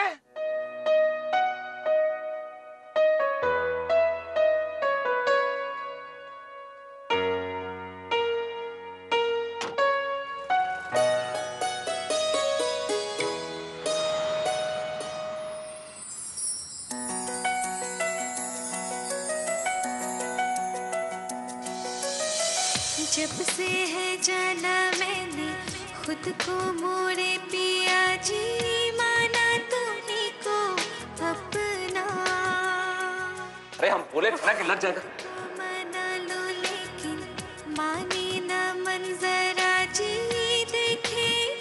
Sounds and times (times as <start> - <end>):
Music: 0.0 - 41.6.